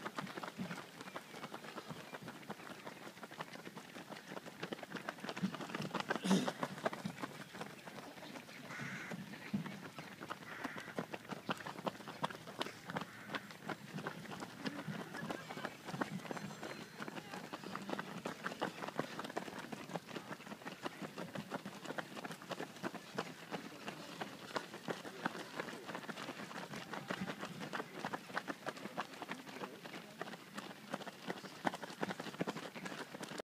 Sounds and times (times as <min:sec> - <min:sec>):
Outside, rural or natural: 0:00.0 - 0:33.4
Run: 0:00.0 - 0:33.4.